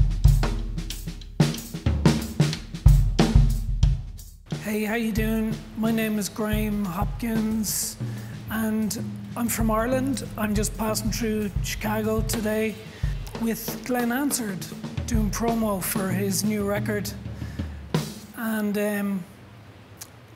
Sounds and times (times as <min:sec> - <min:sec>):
Drum kit: 0:00.0 - 0:18.7
Speech: 0:04.6 - 0:17.2, 0:18.4 - 0:19.3.